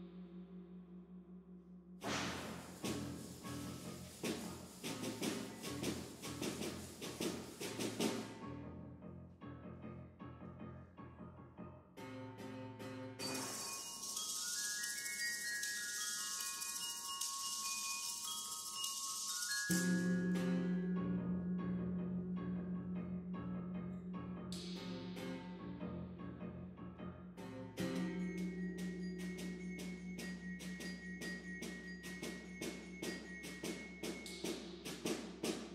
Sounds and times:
Percussion: 0:00.0 - 0:08.6, 0:13.2 - 0:26.2, 0:27.4 - 0:35.7.

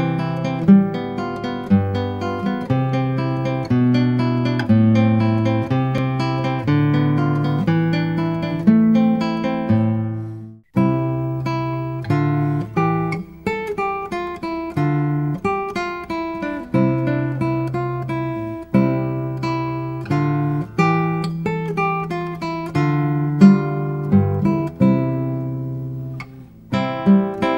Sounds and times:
Acoustic guitar: 0:00.0 - 0:27.5.

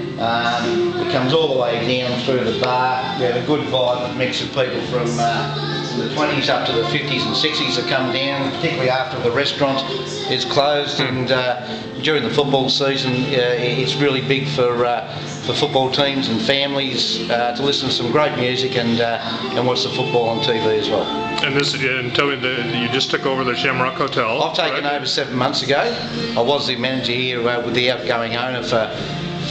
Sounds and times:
Music: 0:00.0 - 0:29.5
Speech: 0:00.2 - 0:29.0.

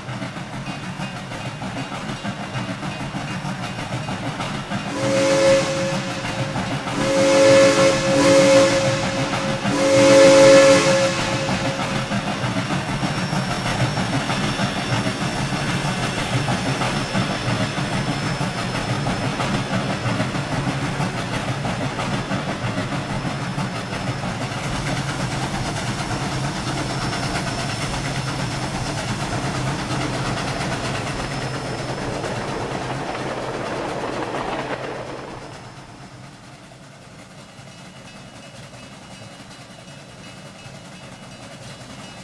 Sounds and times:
Hiss: 0:00.6 - 0:42.2
Steam whistle: 0:04.9 - 0:12.1.

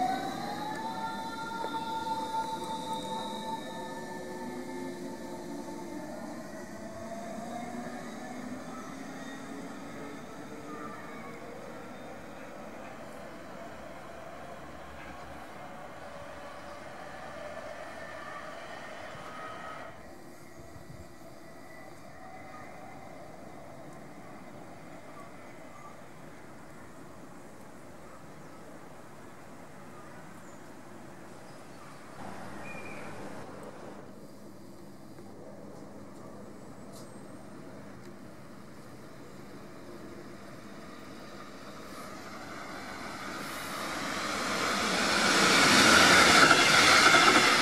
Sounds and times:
Railroad car, train wagon: 0:00.0 - 0:47.6
Subway, metro, underground: 0:00.0 - 0:47.6
Train: 0:00.0 - 0:47.6.

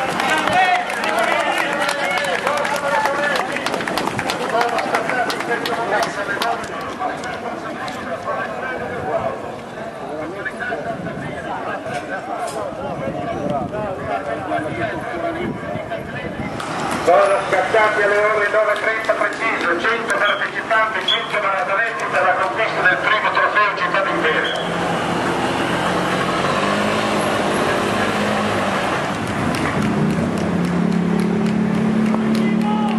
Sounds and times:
Run: 0:00.0 - 0:09.8, 0:18.0 - 0:22.8, 0:29.1 - 0:32.9
Speech: 0:00.0 - 0:24.7, 0:32.4 - 0:32.9
Outside, urban or manmade: 0:00.0 - 0:32.9.

